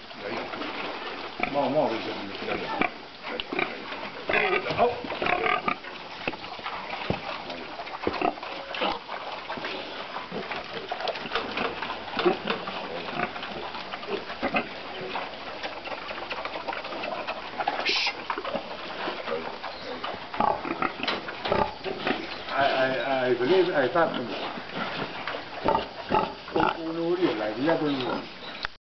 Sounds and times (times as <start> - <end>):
Oink: 0.2 - 28.5
Speech: 1.4 - 2.9, 22.5 - 24.4, 26.6 - 28.3.